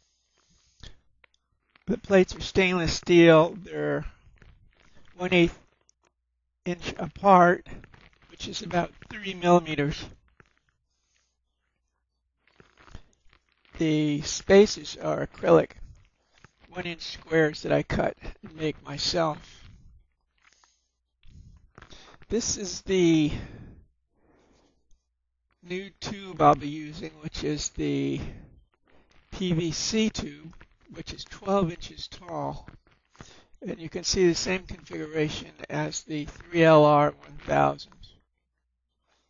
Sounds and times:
Speech: 0:01.9 - 0:04.2, 0:05.1 - 0:05.6, 0:06.7 - 0:07.8, 0:08.4 - 0:10.1, 0:13.8 - 0:15.9, 0:16.7 - 0:19.8, 0:22.3 - 0:23.6, 0:25.7 - 0:28.4, 0:29.4 - 0:32.7, 0:33.6 - 0:38.2.

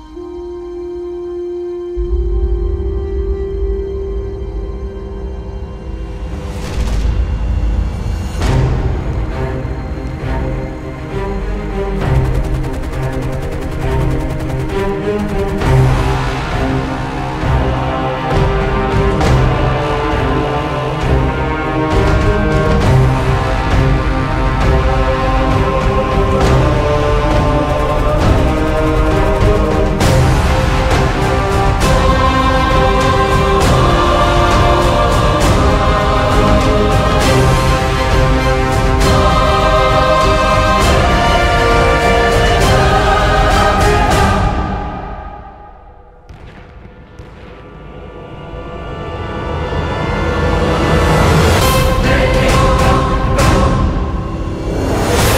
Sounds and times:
Music: 0:00.0 - 0:55.3.

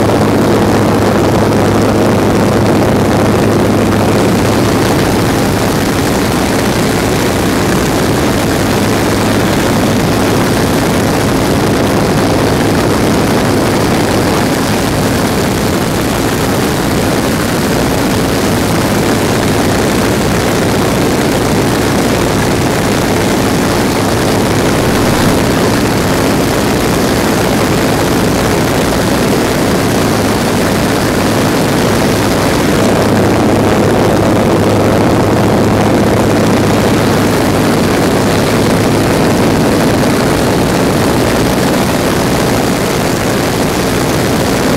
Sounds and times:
Vehicle: 0:00.0 - 0:44.7.

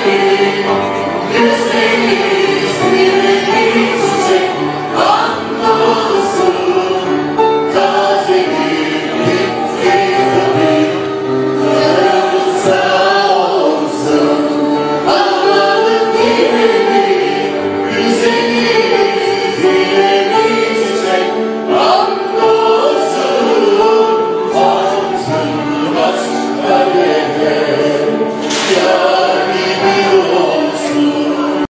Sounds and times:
Choir: 0:00.0 - 0:31.7.

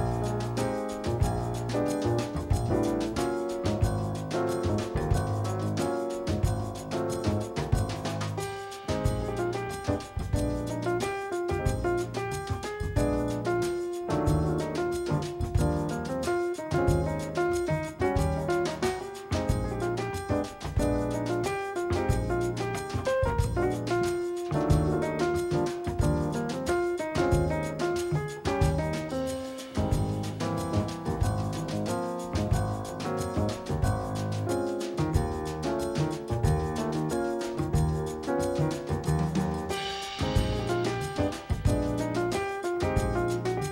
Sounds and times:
Music: 0:00.0 - 0:43.7.

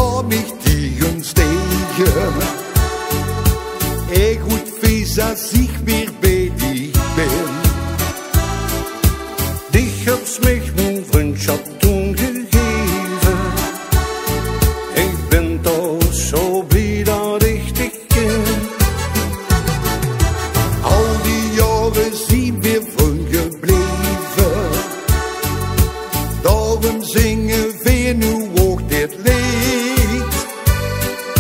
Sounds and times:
Music: 0:00.0 - 0:31.4.

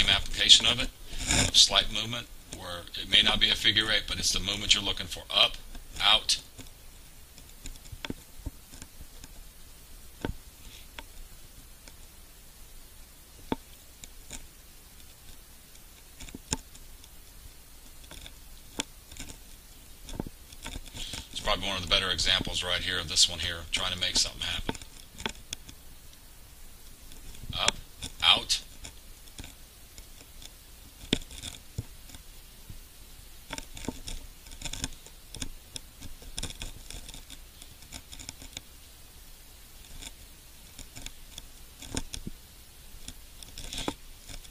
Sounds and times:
Speech: 0:00.0 - 0:06.5, 0:21.4 - 0:24.7, 0:27.6 - 0:28.7.

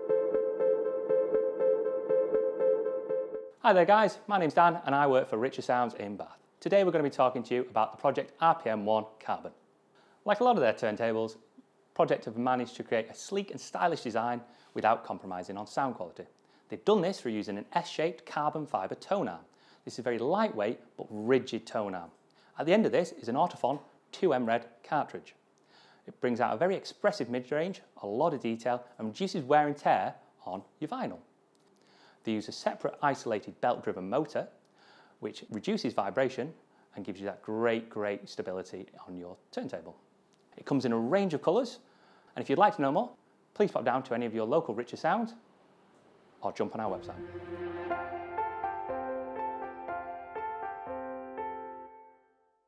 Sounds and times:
Speech: 0:03.6 - 0:09.6, 0:10.2 - 0:25.4, 0:26.1 - 0:31.3, 0:32.2 - 0:34.6, 0:35.2 - 0:40.0, 0:40.6 - 0:45.4, 0:46.4 - 0:47.2.

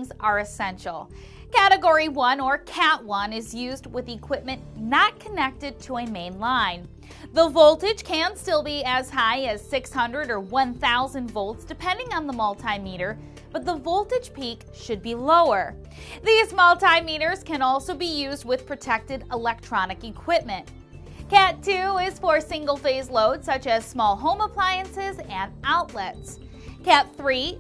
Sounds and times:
Speech: 0:00.0 - 0:20.6, 0:21.3 - 0:27.6
Music: 0:00.0 - 0:27.6.

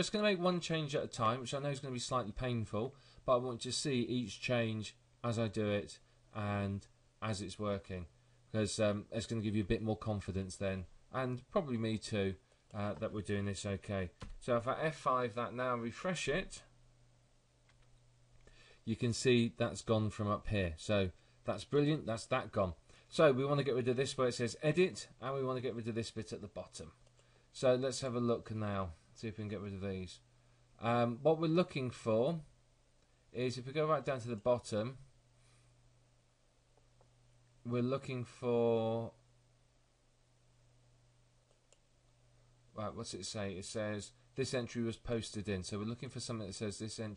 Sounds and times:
Speech: 0:00.0 - 0:16.8, 0:18.9 - 0:27.0, 0:27.6 - 0:32.5, 0:33.4 - 0:35.1, 0:37.6 - 0:39.2, 0:42.8 - 0:47.1.

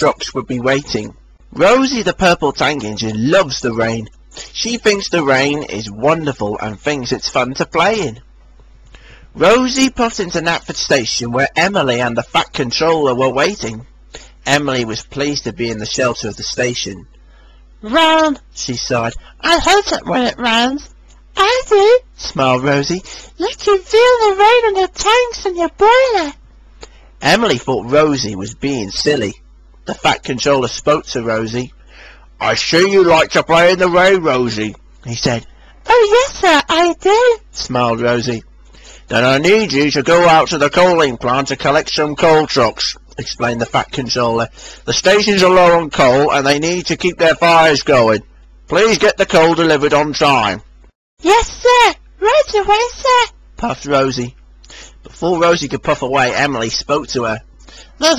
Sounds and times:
Speech: 0:00.0 - 0:08.2, 0:09.4 - 0:17.1, 0:17.8 - 0:26.4, 0:27.2 - 0:31.8, 0:32.4 - 0:38.5, 0:39.1 - 0:50.6, 0:51.2 - 0:58.1.

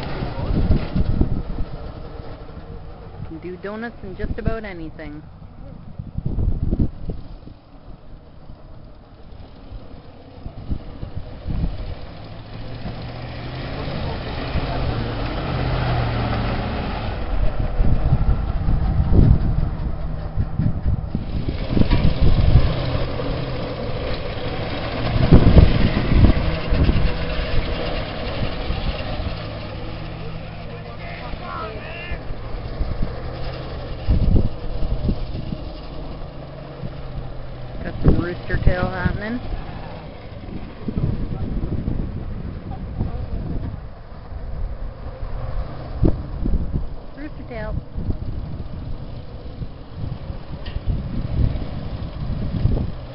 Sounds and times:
Bus: 0:00.0 - 0:53.1
Speech: 0:03.3 - 0:05.8, 0:30.5 - 0:32.2, 0:37.8 - 0:39.4, 0:47.2 - 0:47.8.

